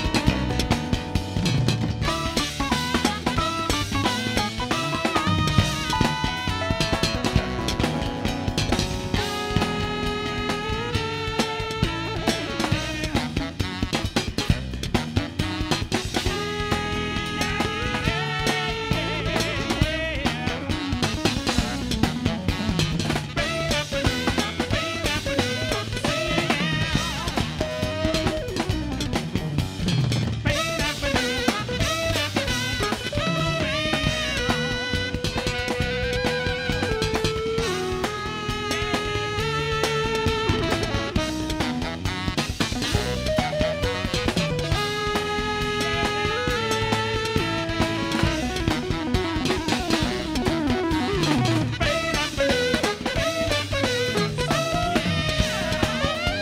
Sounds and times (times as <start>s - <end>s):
Music: 0.0s - 56.4s.